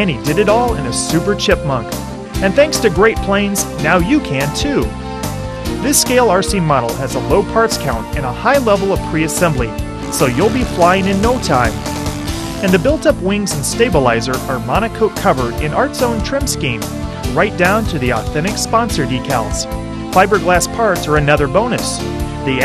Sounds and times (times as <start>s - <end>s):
Speech: 0.0s - 4.9s, 5.8s - 11.8s, 12.6s - 22.6s
Music: 0.0s - 22.6s.